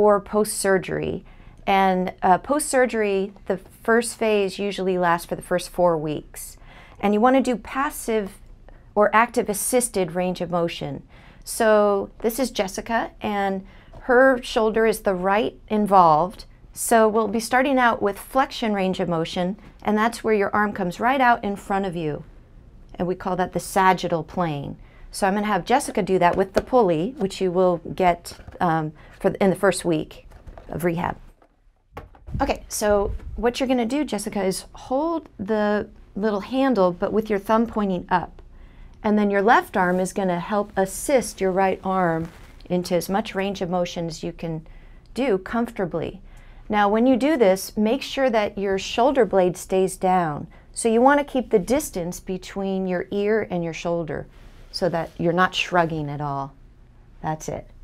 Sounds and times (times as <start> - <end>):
Speech: 0.0 - 8.4, 9.0 - 22.3, 22.9 - 31.2, 32.4 - 38.4, 39.0 - 56.6, 57.2 - 57.7.